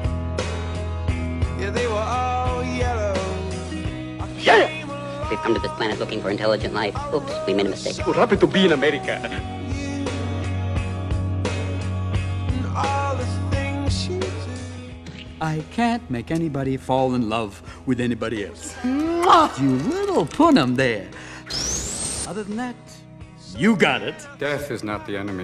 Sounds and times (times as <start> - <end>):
Music: 0.0 - 25.4
Speech: 4.4 - 9.4, 15.4 - 21.1, 23.5 - 25.4.